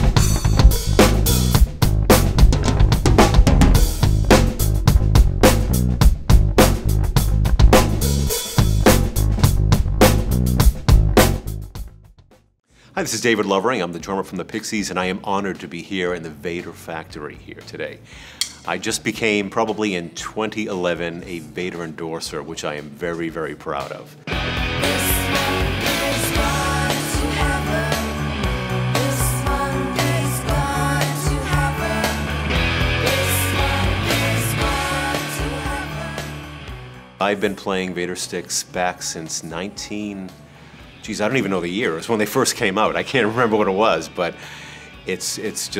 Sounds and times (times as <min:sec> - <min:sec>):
Music: 0:00.0 - 0:45.7.